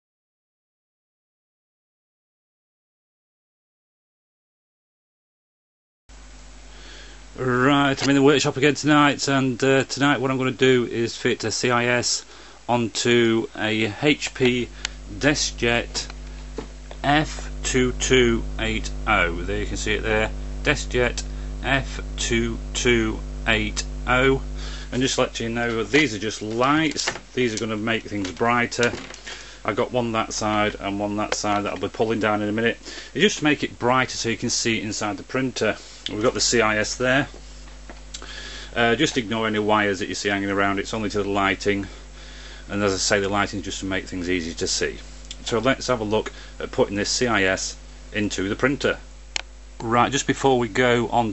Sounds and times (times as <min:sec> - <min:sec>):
Speech: 0:07.4 - 0:16.2, 0:17.0 - 0:29.1, 0:29.7 - 0:37.4, 0:38.2 - 0:42.0, 0:42.7 - 0:49.1, 0:49.8 - 0:51.3.